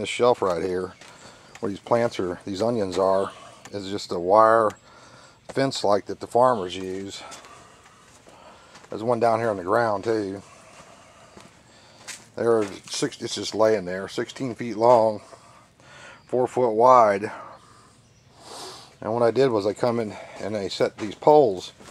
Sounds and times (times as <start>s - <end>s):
Speech: 0.0s - 1.0s, 1.6s - 4.8s, 5.5s - 7.4s, 8.9s - 10.5s, 12.4s - 15.3s, 16.3s - 17.5s, 19.0s - 21.8s.